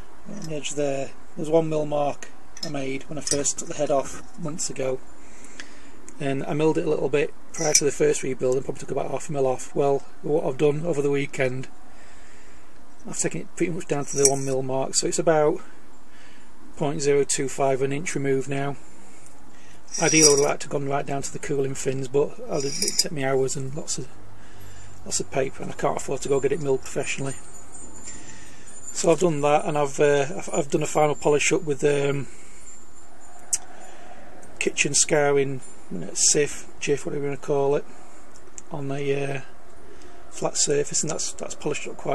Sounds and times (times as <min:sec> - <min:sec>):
Vehicle: 0:00.0 - 0:42.1
Speech: 0:00.3 - 0:05.0, 0:06.2 - 0:11.7, 0:13.1 - 0:15.7, 0:16.8 - 0:18.8, 0:20.0 - 0:24.1, 0:25.1 - 0:27.4, 0:29.0 - 0:32.3, 0:34.6 - 0:37.9, 0:38.7 - 0:39.5, 0:40.4 - 0:42.1.